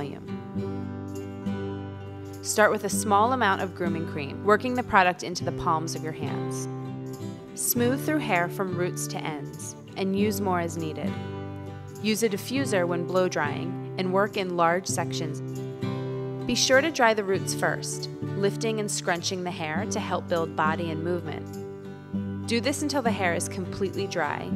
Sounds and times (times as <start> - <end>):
Speech: 0.0 - 0.2, 2.5 - 6.7, 7.6 - 11.1, 12.0 - 15.4, 16.5 - 21.4, 22.5 - 24.5
Music: 0.0 - 24.5.